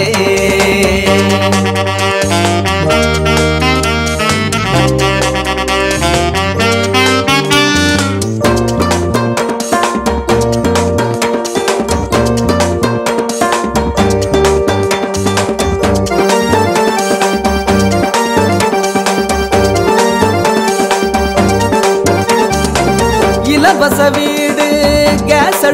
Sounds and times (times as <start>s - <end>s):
Saxophone: 1.0s - 9.3s, 16.0s - 24.5s.